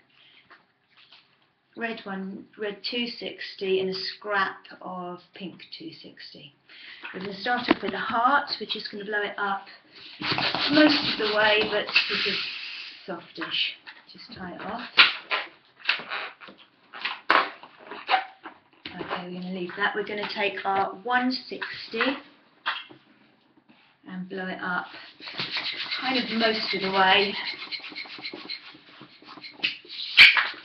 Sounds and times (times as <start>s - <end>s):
Speech: 1.8s - 9.8s, 10.5s - 15.0s, 18.9s - 22.3s, 24.1s - 25.0s, 25.8s - 27.6s.